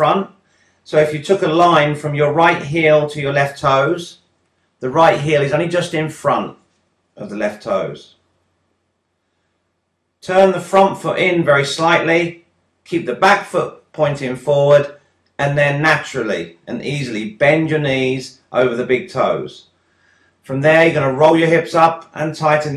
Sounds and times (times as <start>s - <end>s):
Speech: 0.0s - 0.3s, 0.9s - 4.1s, 4.8s - 6.5s, 7.2s - 8.1s, 10.2s - 19.6s, 20.5s - 22.7s.